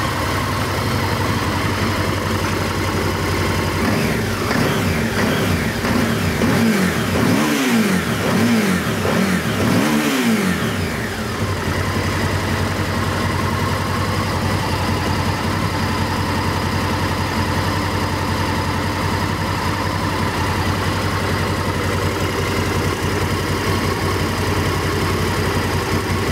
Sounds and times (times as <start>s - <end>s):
Clatter: 0.0s - 26.3s.